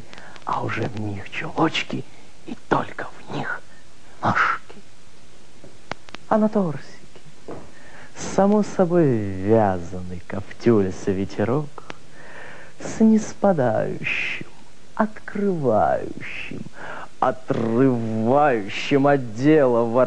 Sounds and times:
Narration, monologue: 0.0 - 20.0.

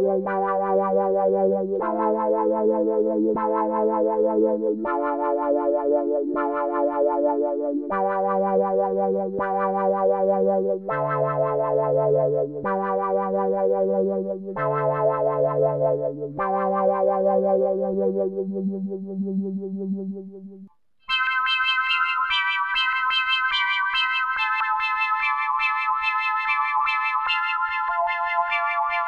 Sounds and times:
Synthesizer: 0.0 - 29.0.

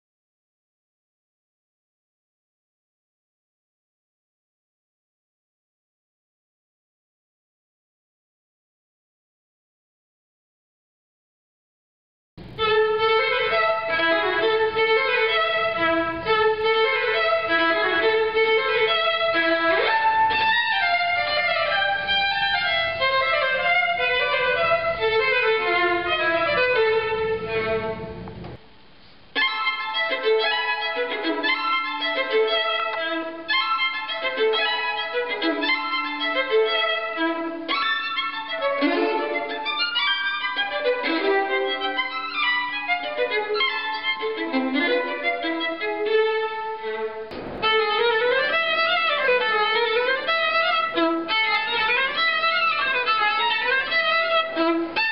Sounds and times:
Violin, fiddle: 12.4 - 28.6, 29.4 - 55.1.

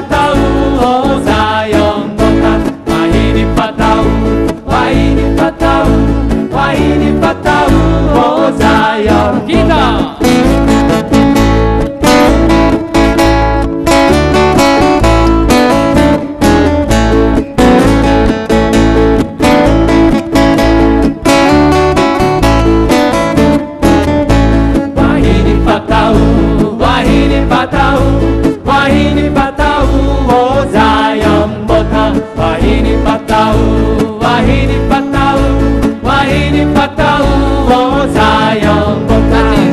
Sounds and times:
Music: 0.0 - 39.7.

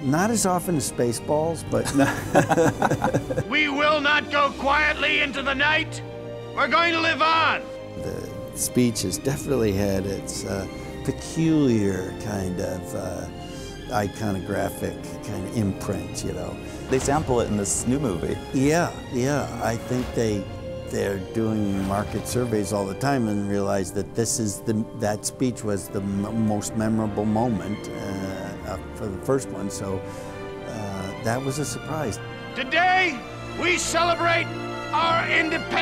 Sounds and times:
Male speech, man speaking: 0.0 - 2.2, 3.4 - 6.0, 6.6 - 13.3, 13.9 - 30.0, 30.7 - 35.8
Music: 0.0 - 35.8
Narration, monologue: 0.0 - 35.8.

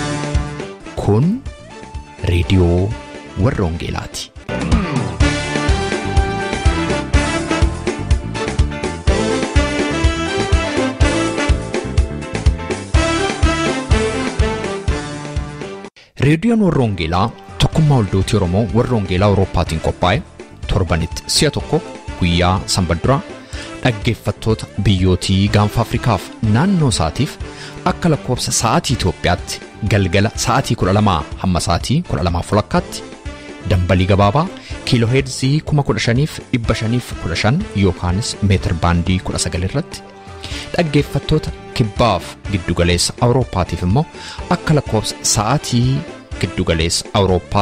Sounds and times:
Music: 0.0 - 47.6
Speech: 0.9 - 1.5, 2.2 - 4.4, 16.2 - 33.1, 33.7 - 40.0, 40.7 - 47.6.

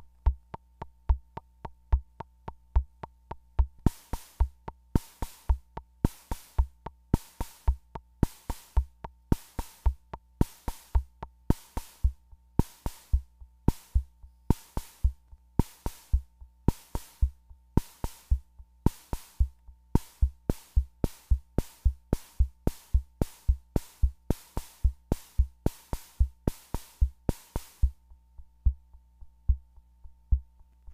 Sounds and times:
Drum machine: 0.0 - 30.9.

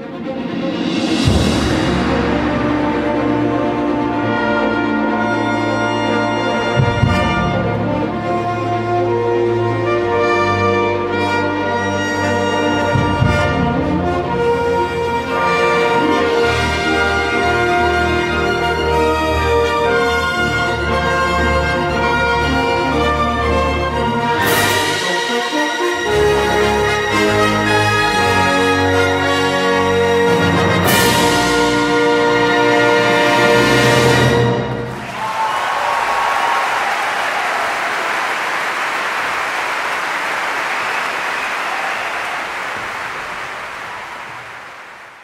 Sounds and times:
Music: 0.0 - 35.2
Crowd: 34.4 - 45.2
Applause: 34.9 - 45.2.

